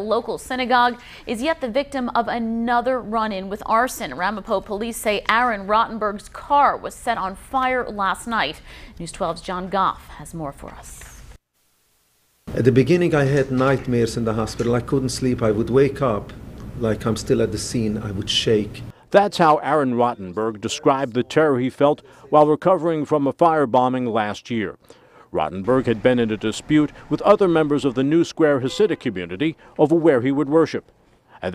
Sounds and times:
Speech: 12.5 - 24.8, 25.4 - 30.8.

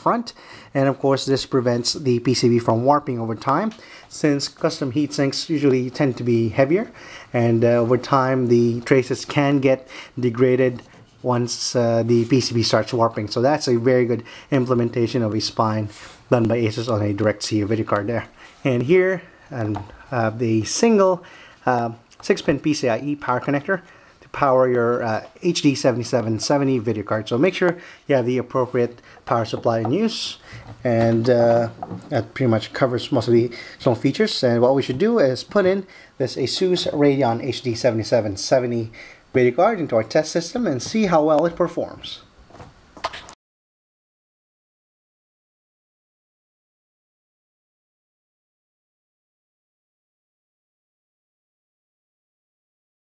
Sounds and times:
Speech: 0.0 - 42.3.

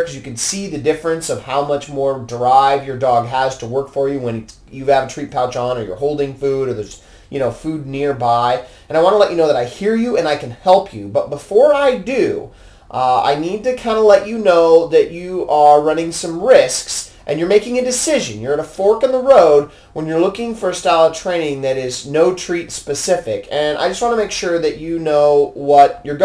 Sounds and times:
Speech: 0.0 - 26.2.

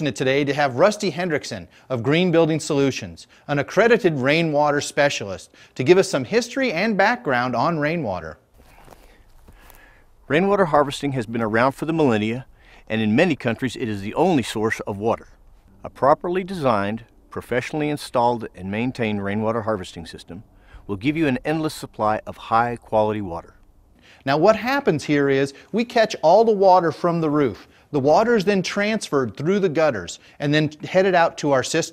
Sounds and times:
Speech: 0.0 - 8.4, 10.3 - 23.6, 24.2 - 31.9.

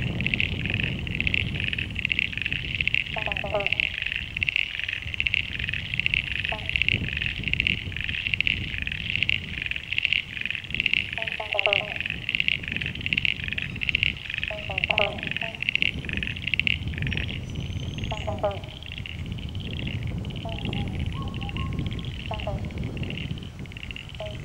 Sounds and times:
Frog: 0.0 - 24.4.

